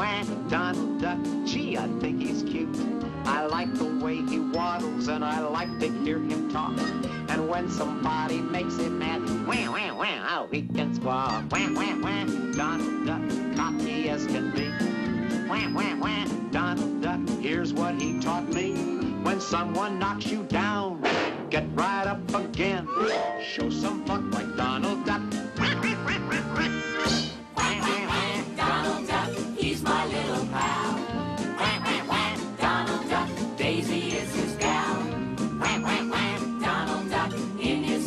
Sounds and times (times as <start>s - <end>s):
Music: 0.0s - 38.0s
Quack: 25.6s - 27.2s.